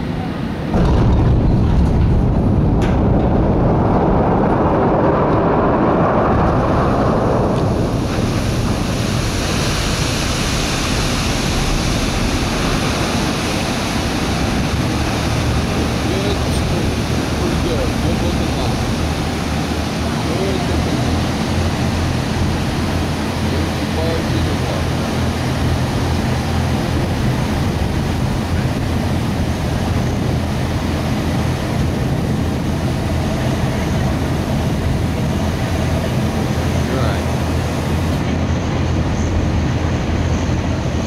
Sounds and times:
Boat, Water vehicle: 0:00.0 - 0:41.0
Speech: 0:16.0 - 0:19.0, 0:20.0 - 0:21.2, 0:23.5 - 0:24.9, 0:36.8 - 0:37.3.

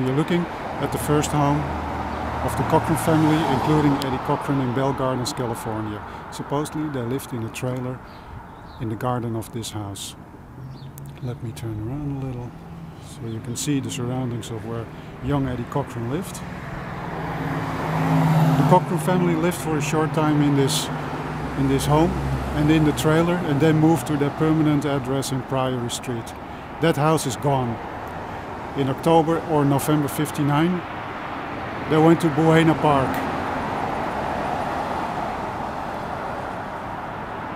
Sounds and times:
Speech: 0:00.0 - 0:01.7, 0:02.4 - 0:08.0, 0:08.8 - 0:10.2, 0:11.2 - 0:16.4, 0:18.6 - 0:20.9, 0:21.6 - 0:27.8, 0:28.8 - 0:30.9, 0:31.9 - 0:33.3.

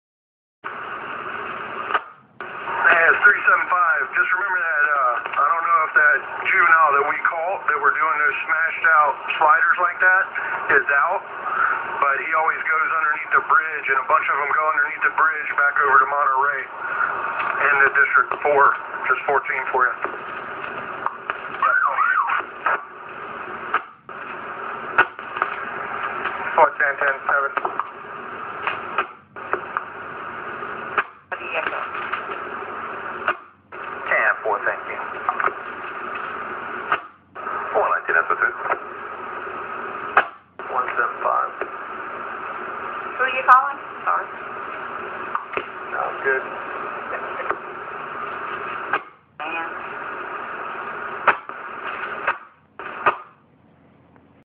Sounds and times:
Radio: 0:00.7 - 0:53.4
Speech: 0:02.8 - 0:11.3, 0:12.0 - 0:16.8, 0:17.6 - 0:20.1, 0:26.6 - 0:27.7, 0:31.4 - 0:31.9, 0:34.1 - 0:35.1, 0:37.7 - 0:38.8, 0:40.6 - 0:41.6, 0:45.9 - 0:47.6, 0:49.4 - 0:49.8.

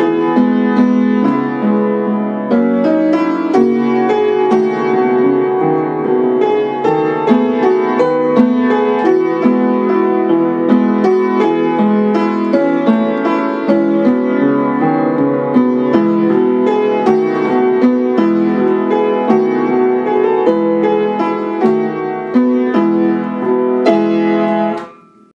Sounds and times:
Music: 0:00.0 - 0:25.3.

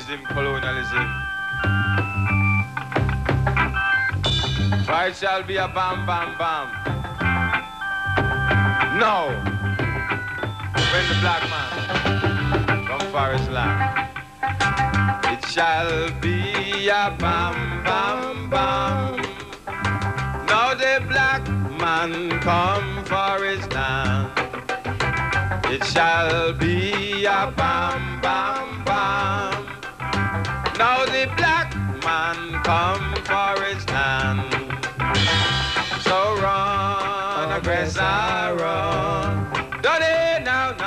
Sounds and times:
Music: 0:00.0 - 0:40.8.

